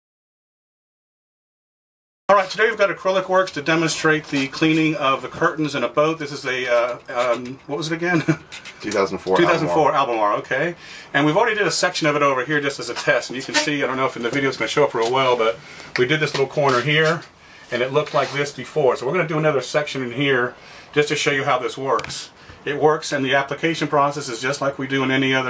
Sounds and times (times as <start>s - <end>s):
Speech: 2.3s - 25.5s.